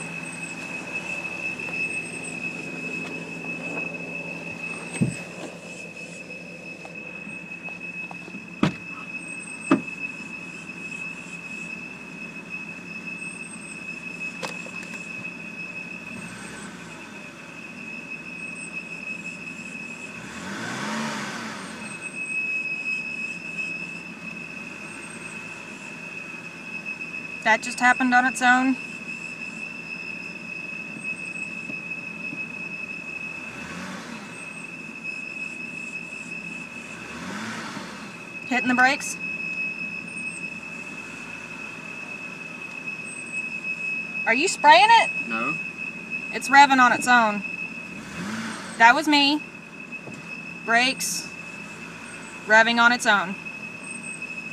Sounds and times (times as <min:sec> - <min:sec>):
Vehicle: 0:00.0 - 0:54.5.